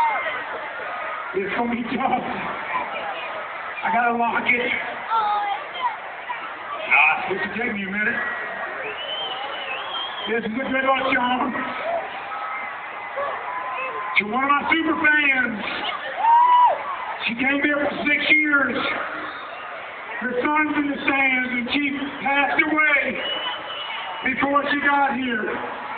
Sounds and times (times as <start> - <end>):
Male speech, man speaking: 1.4 - 2.4, 3.8 - 4.9, 6.9 - 8.2, 10.2 - 11.7, 14.2 - 15.9, 17.2 - 19.0, 20.2 - 23.2, 24.2 - 25.6.